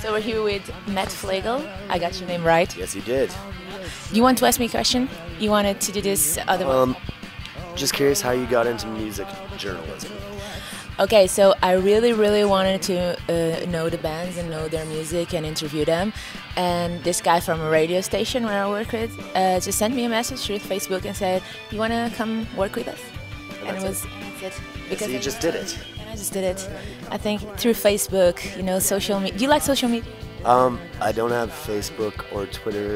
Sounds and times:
Music: 0:00.0 - 0:32.9
Speech: 0:04.2 - 0:07.0, 0:07.8 - 0:10.1, 0:11.0 - 0:16.0, 0:16.6 - 0:23.0, 0:23.6 - 0:24.1, 0:24.9 - 0:32.9.

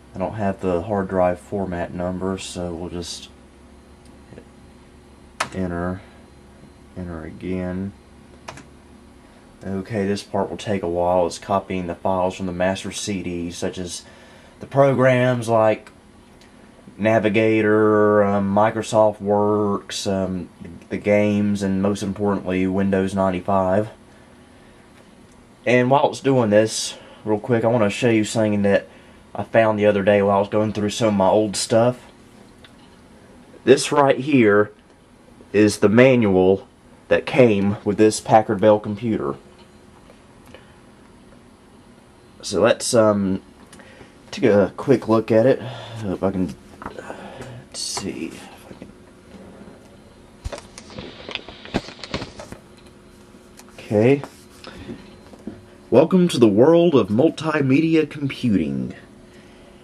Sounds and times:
Speech: 0:00.2 - 0:03.4, 0:05.4 - 0:06.2, 0:07.0 - 0:08.0, 0:09.6 - 0:15.9, 0:17.0 - 0:24.0, 0:25.6 - 0:32.1, 0:33.6 - 0:34.8, 0:35.5 - 0:39.4, 0:42.4 - 0:43.5, 0:44.3 - 0:46.6, 0:47.6 - 0:48.6, 0:53.8 - 0:54.4, 0:55.9 - 0:59.1.

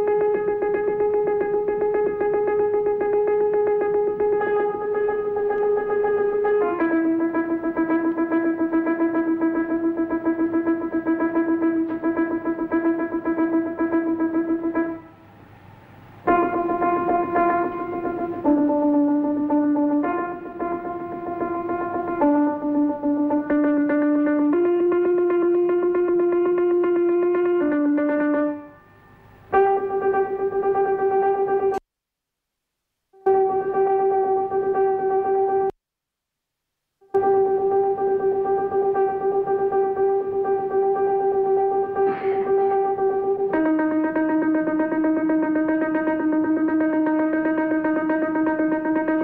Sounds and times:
Music: 0:00.0 - 0:31.8, 0:33.1 - 0:35.8, 0:37.0 - 0:49.2.

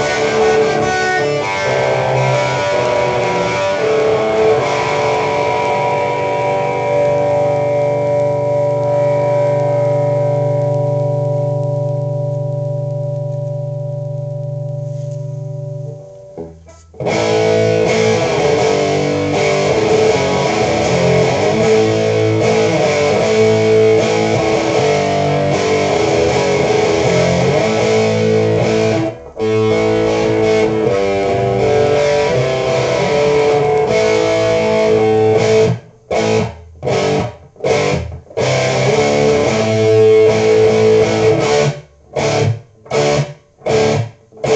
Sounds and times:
Distortion: 0:00.0 - 0:44.5
Music: 0:00.0 - 0:44.5.

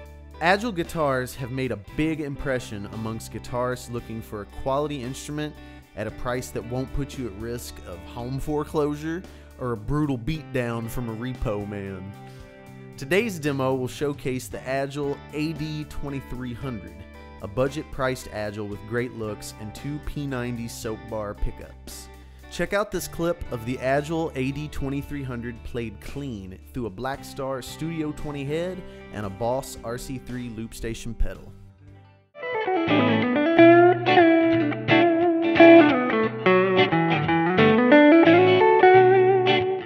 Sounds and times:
Speech: 0:00.4 - 0:12.2, 0:13.0 - 0:31.6
Electric guitar: 0:32.4 - 0:39.8.

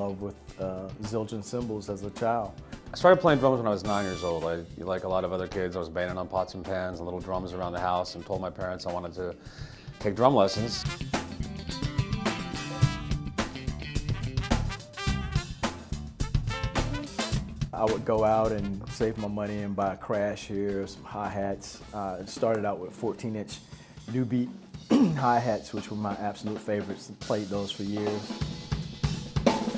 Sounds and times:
Speech: 0:00.0 - 0:09.4, 0:10.0 - 0:10.8, 0:17.8 - 0:28.4
Music: 0:00.0 - 0:29.7.

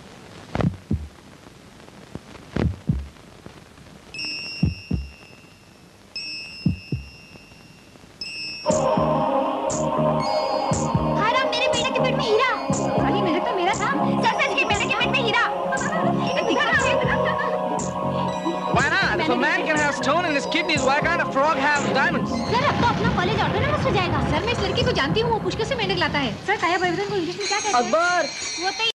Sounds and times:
Music: 0:04.2 - 0:23.2.

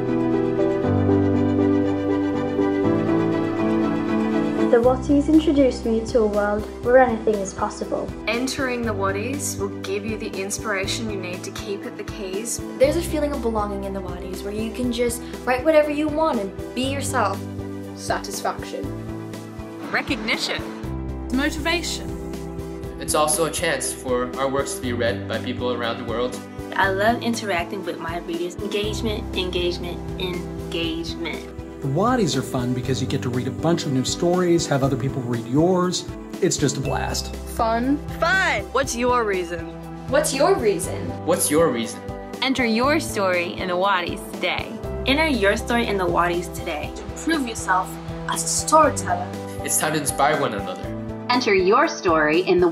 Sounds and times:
Music: 0:00.0 - 0:52.7
Speech: 0:31.9 - 0:37.0.

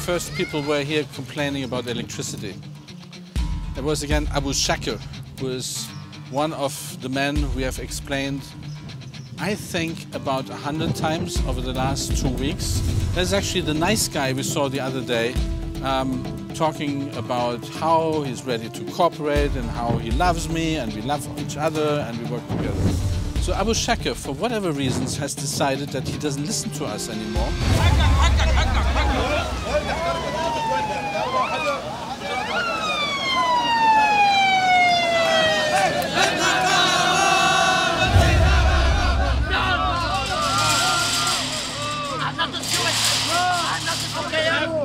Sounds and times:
Fire engine, fire truck (siren): 0:29.0 - 0:36.2.

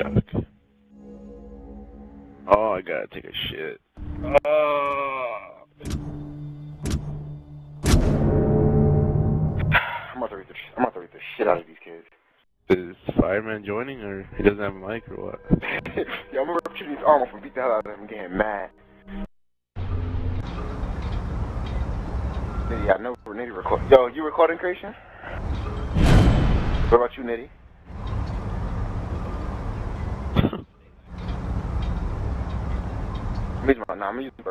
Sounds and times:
Speech: 0:00.0 - 0:00.4, 0:02.5 - 0:05.6, 0:10.1 - 0:12.1, 0:12.7 - 0:18.7, 0:22.7 - 0:25.0, 0:26.9 - 0:27.5, 0:33.6 - 0:34.5.

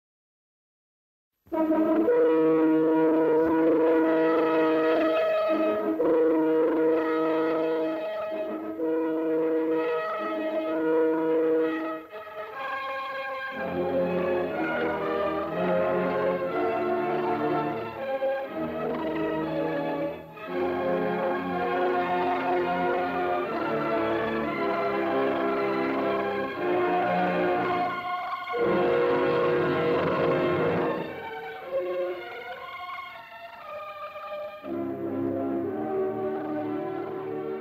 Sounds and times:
Music: 0:01.4 - 0:37.6.

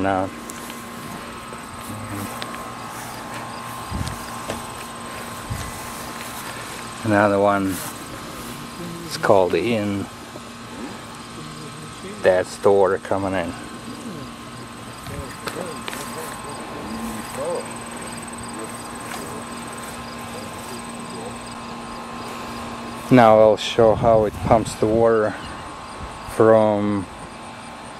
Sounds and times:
Speech: 0:00.0 - 0:00.4, 0:07.0 - 0:07.8, 0:08.8 - 0:10.1, 0:11.4 - 0:14.3, 0:15.0 - 0:19.5, 0:23.1 - 0:25.5, 0:26.3 - 0:27.1.

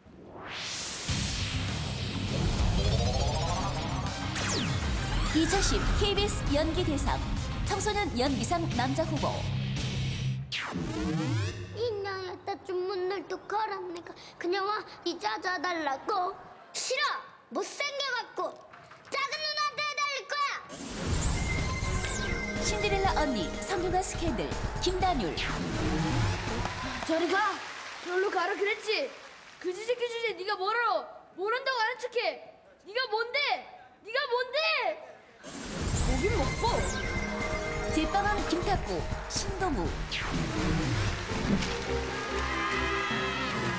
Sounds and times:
Music: 0:01.1 - 0:11.9, 0:21.0 - 0:27.1, 0:35.8 - 0:43.7.

